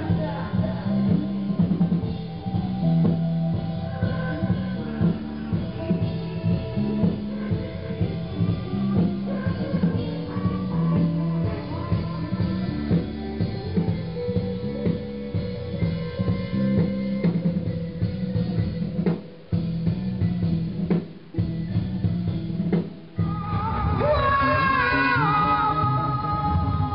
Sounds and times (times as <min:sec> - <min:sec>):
Progressive rock: 0:00.0 - 0:26.9.